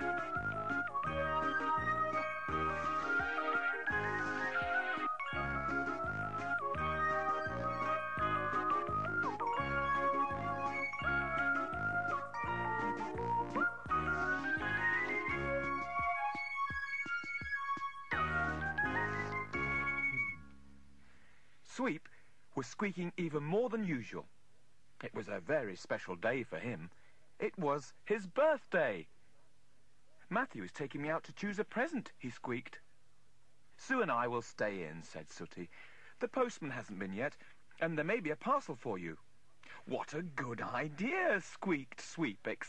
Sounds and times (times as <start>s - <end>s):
Music: 0.0s - 21.0s
Speech: 21.6s - 24.3s, 25.0s - 29.1s, 30.2s - 32.9s, 33.8s - 39.2s, 39.8s - 42.6s.